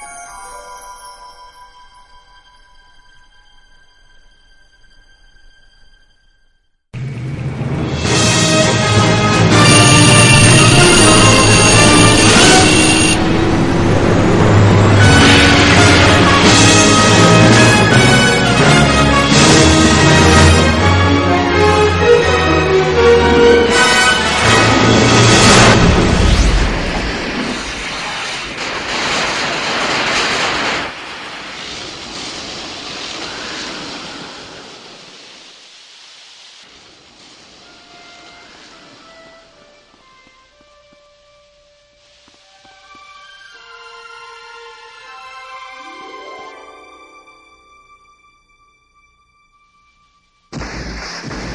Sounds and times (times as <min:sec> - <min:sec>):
Music: 0:00.0 - 0:26.2, 0:37.8 - 0:50.6.